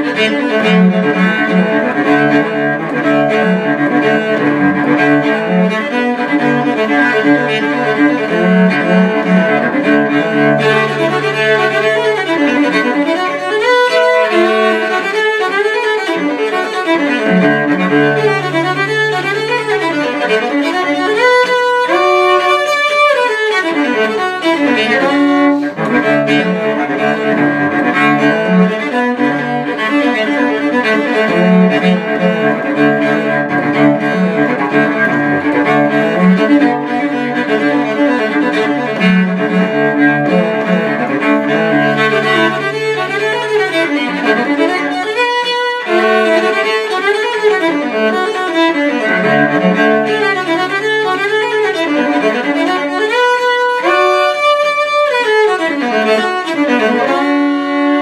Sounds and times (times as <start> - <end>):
Cello: 0.0 - 58.0
Violin, fiddle: 0.0 - 58.0.